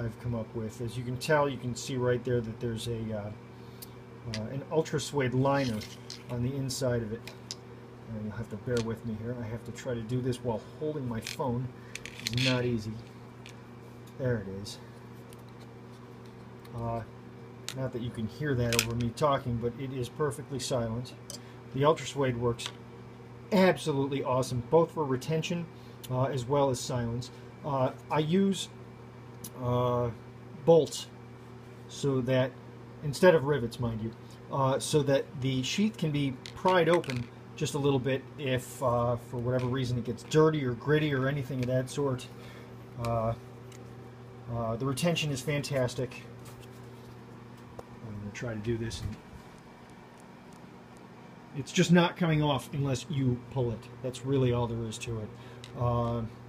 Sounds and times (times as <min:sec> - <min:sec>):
Speech: 0:00.0 - 0:03.4, 0:04.3 - 0:07.4, 0:08.1 - 0:13.1, 0:14.2 - 0:14.9, 0:16.7 - 0:17.1, 0:17.7 - 0:22.8, 0:23.5 - 0:28.8, 0:29.5 - 0:31.2, 0:31.9 - 0:42.4, 0:43.0 - 0:43.4, 0:44.5 - 0:46.3, 0:48.0 - 0:49.2, 0:51.6 - 0:56.4.